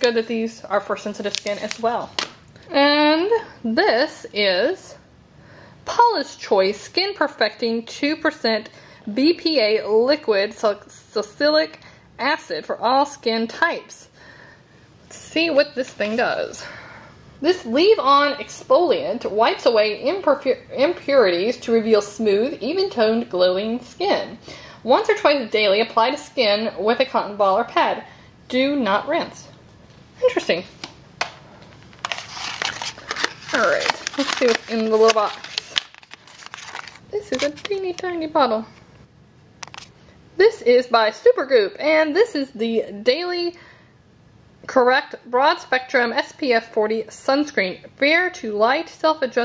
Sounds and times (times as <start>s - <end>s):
Speech: 0.0s - 5.1s, 5.9s - 14.1s, 15.1s - 16.7s, 17.4s - 29.6s, 30.2s - 30.8s, 33.5s - 35.5s, 37.1s - 38.8s, 40.4s - 43.6s, 44.7s - 49.4s
Inside, small room: 0.0s - 49.4s.